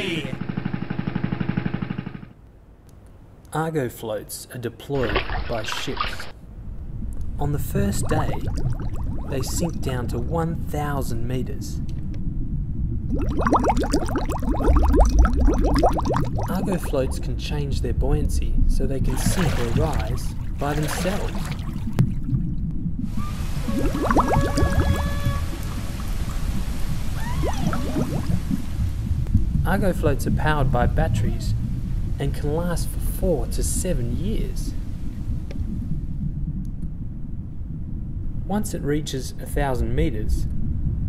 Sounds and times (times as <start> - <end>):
Speech: 0.0 - 0.4, 3.5 - 6.2, 7.4 - 8.5, 9.3 - 11.8, 16.5 - 21.4, 29.7 - 31.6, 32.2 - 34.8, 38.5 - 40.5.